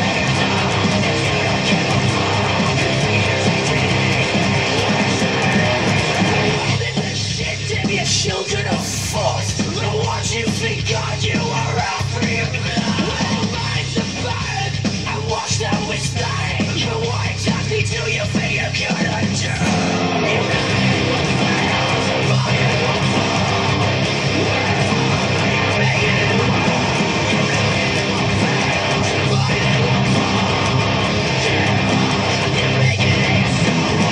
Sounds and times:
Electric guitar: 0.0s - 34.1s.

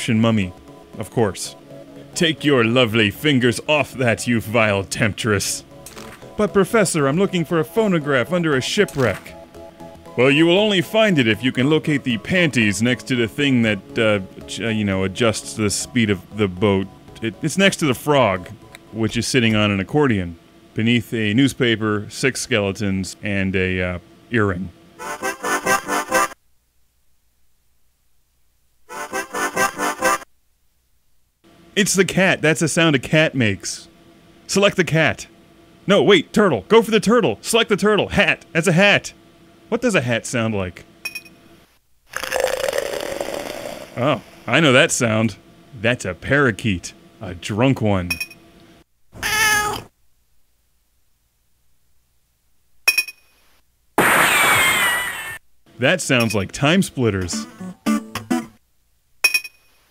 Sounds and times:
Speech: 0.0s - 1.6s, 2.2s - 5.6s, 6.4s - 9.4s, 10.2s - 24.8s, 31.8s - 33.9s, 34.5s - 35.3s, 35.9s - 40.9s, 44.0s - 48.2s, 55.8s - 57.4s.

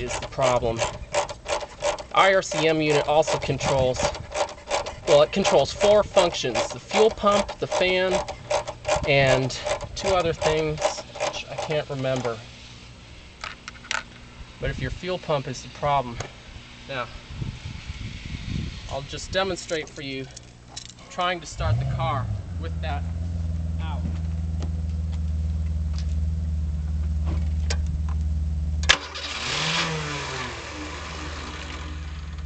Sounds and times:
Mechanisms: 0.0s - 21.8s.

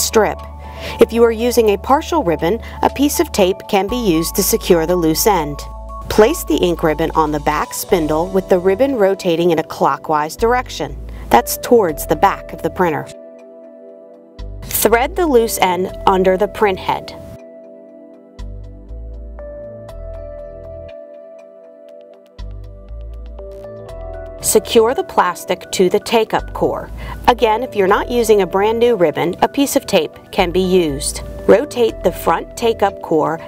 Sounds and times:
Music: 0.0s - 33.4s
Speech: 1.0s - 13.2s, 14.7s - 17.2s, 24.4s - 33.4s.

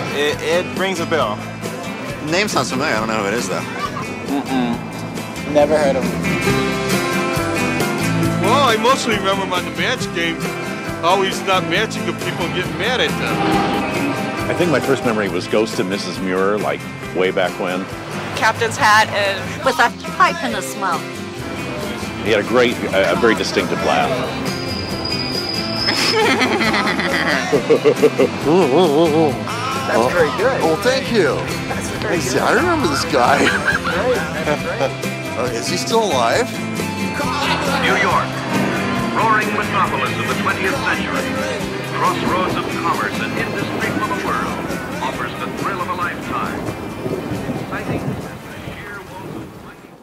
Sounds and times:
Music: 0.0s - 49.7s.

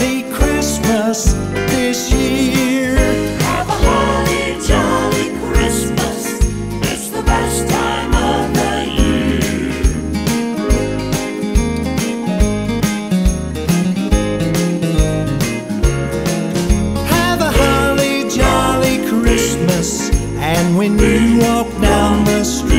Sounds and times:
Christian music: 0.0s - 22.7s
Christmas music: 0.0s - 22.7s.

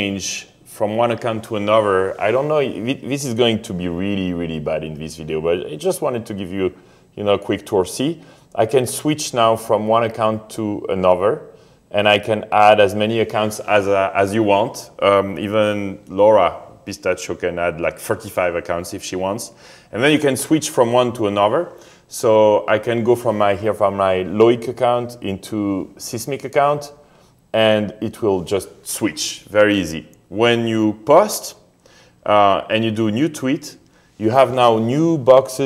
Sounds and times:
Speech: 0.0s - 35.6s.

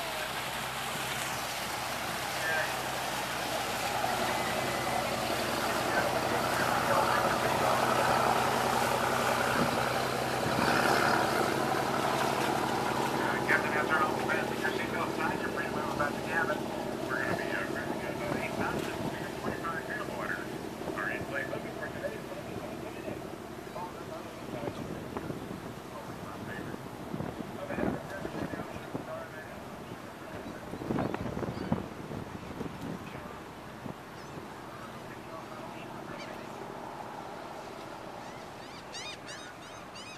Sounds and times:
Speech: 0.0s - 0.5s, 2.3s - 26.8s, 27.6s - 31.8s, 32.9s - 33.5s, 34.6s - 36.8s
Motorboat, speedboat: 0.0s - 40.1s.

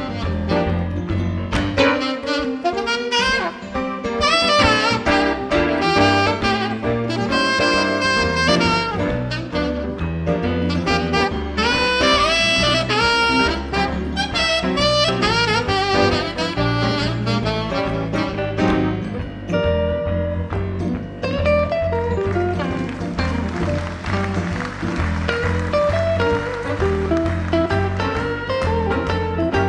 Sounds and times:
Saxophone: 0.0s - 19.3s, 21.7s - 29.6s.

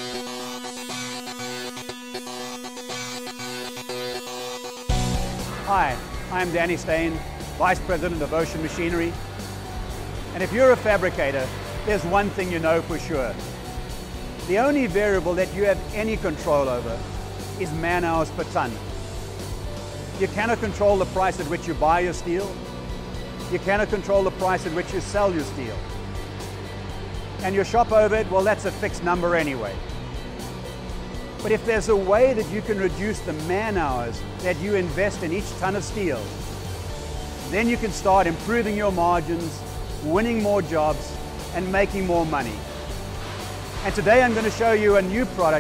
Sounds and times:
Music: 0.0s - 45.6s
Speech: 5.7s - 9.2s, 10.4s - 13.4s, 14.5s - 17.0s, 17.6s - 18.8s, 20.2s - 22.6s, 23.5s - 25.8s, 27.4s - 29.8s, 31.4s - 36.3s, 37.5s - 42.6s, 43.8s - 45.6s.

